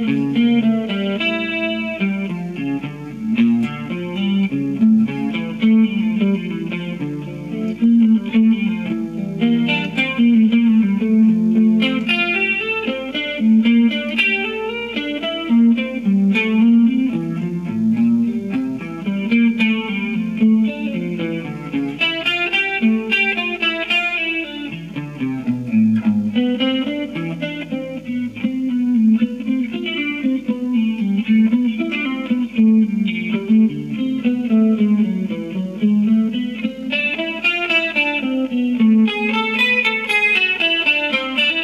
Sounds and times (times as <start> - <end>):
Electric guitar: 0.0 - 41.6.